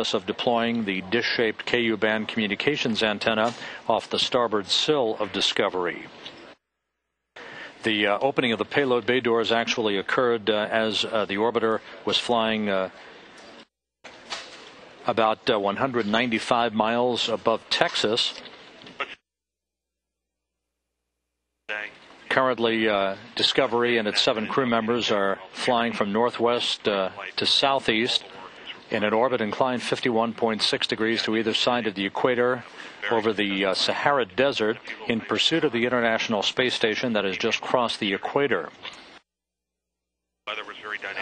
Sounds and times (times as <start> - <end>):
Speech: 0.0 - 6.1, 7.8 - 13.0, 15.0 - 18.4, 21.7 - 38.8, 40.5 - 41.2.